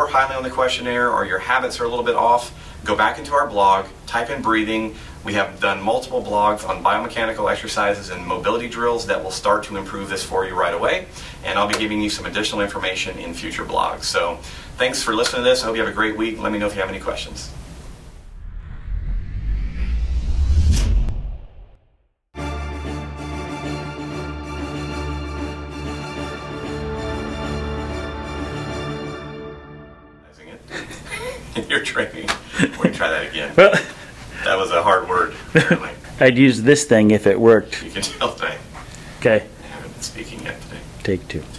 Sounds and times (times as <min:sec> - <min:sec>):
Speech: 0:00.0 - 0:17.6, 0:30.3 - 0:30.7, 0:31.6 - 0:33.8, 0:34.4 - 0:41.5
Music: 0:22.4 - 0:30.4.